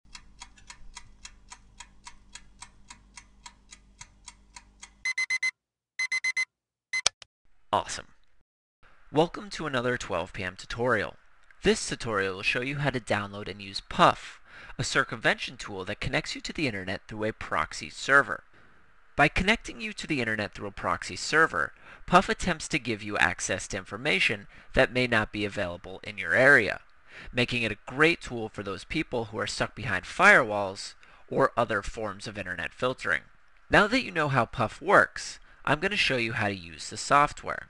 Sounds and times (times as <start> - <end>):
Speech: 7.7 - 8.2, 9.1 - 18.4, 19.2 - 37.6.